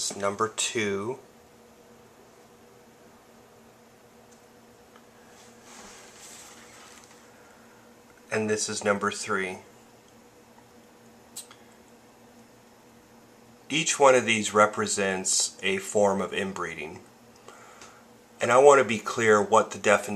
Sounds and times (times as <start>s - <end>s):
Speech: 0.0s - 1.2s, 8.3s - 9.7s, 13.7s - 17.1s, 18.4s - 20.1s
Inside, small room: 0.0s - 20.1s.